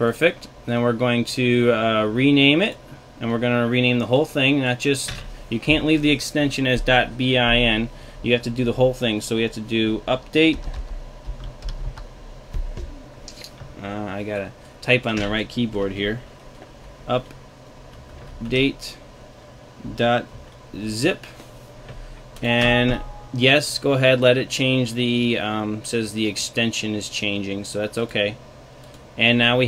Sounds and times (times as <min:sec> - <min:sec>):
Speech: 0:00.0 - 0:10.7, 0:13.8 - 0:16.2, 0:17.1 - 0:17.3, 0:18.4 - 0:19.0, 0:19.8 - 0:21.3, 0:22.4 - 0:28.4, 0:29.2 - 0:29.6
Computer keyboard: 0:10.2 - 0:13.4.